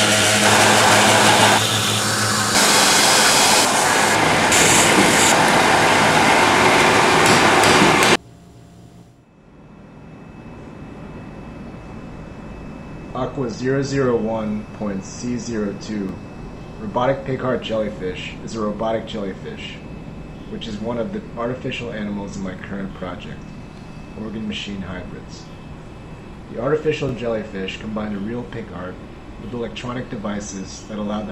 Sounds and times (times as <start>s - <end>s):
Speech: 13.2s - 16.2s, 16.8s - 19.8s, 20.5s - 23.4s, 24.2s - 25.5s, 26.5s - 31.3s.